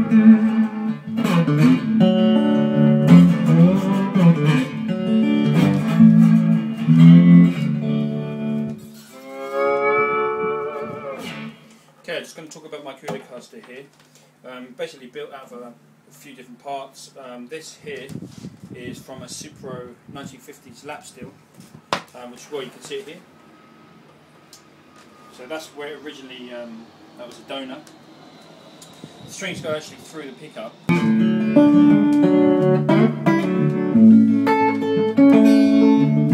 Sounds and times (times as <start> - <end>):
Speech: 12.0 - 21.4, 22.1 - 23.3, 25.3 - 27.9, 29.3 - 30.8.